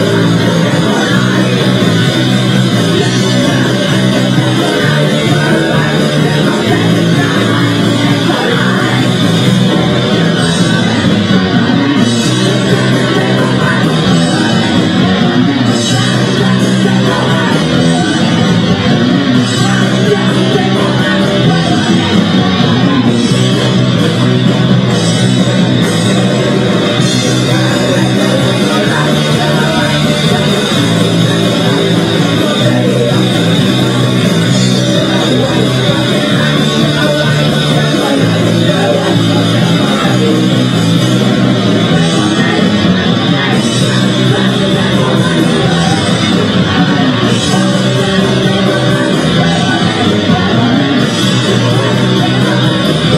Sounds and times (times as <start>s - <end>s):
Music: 0.0s - 53.1s.